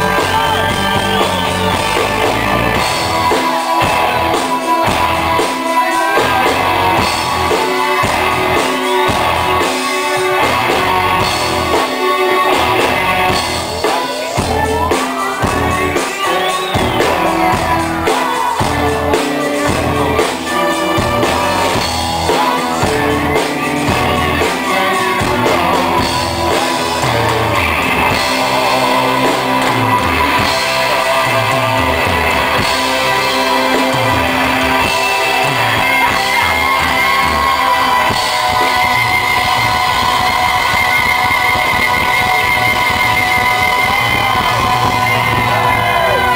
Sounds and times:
Inside, large room or hall: 0:00.0 - 0:46.3
Music: 0:00.0 - 0:46.3
Shout: 0:24.1 - 0:46.3.

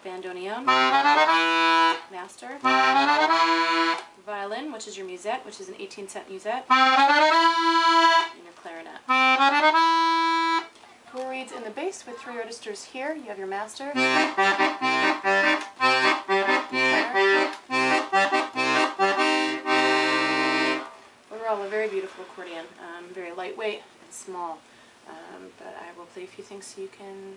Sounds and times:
Speech: 0:00.0 - 0:00.7, 0:02.1 - 0:02.7, 0:04.2 - 0:06.7, 0:08.3 - 0:09.1, 0:11.1 - 0:14.0, 0:21.3 - 0:27.3
Music: 0:00.7 - 0:04.1, 0:06.7 - 0:08.4, 0:09.1 - 0:10.7, 0:14.0 - 0:21.0.

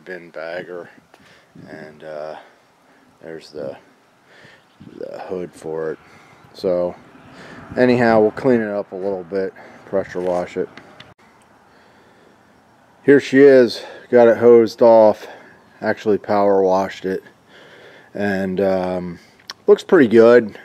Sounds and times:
Speech: 0:00.0 - 0:01.0, 0:01.6 - 0:02.5, 0:03.2 - 0:03.9, 0:04.8 - 0:06.0, 0:06.6 - 0:07.0, 0:07.8 - 0:10.7, 0:13.1 - 0:17.3, 0:18.2 - 0:20.6.

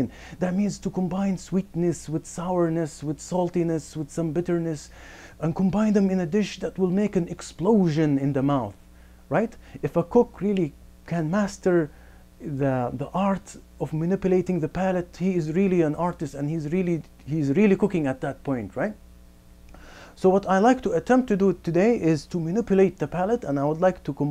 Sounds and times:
Speech: 0:00.0 - 0:19.0, 0:20.2 - 0:24.3.

